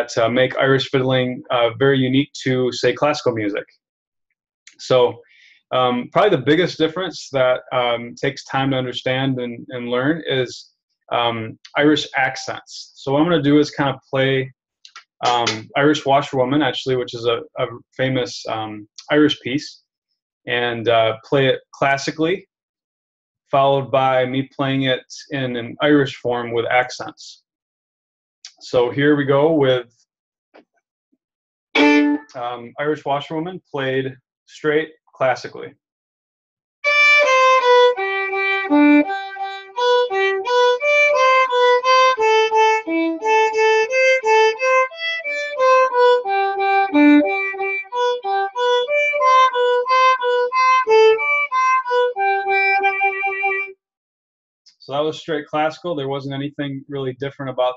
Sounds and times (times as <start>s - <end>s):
Speech: 0.0s - 3.6s, 4.7s - 19.8s, 20.5s - 22.4s, 23.6s - 27.4s, 28.5s - 29.8s, 32.3s - 35.7s, 54.7s - 57.7s.